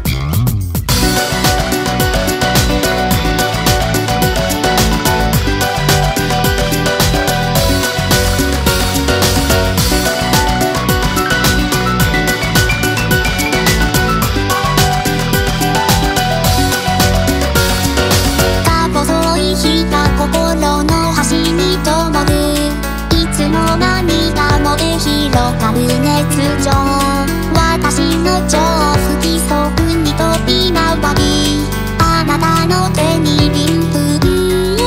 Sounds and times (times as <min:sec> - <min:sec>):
Musical instrument: 0:00.9 - 0:34.8.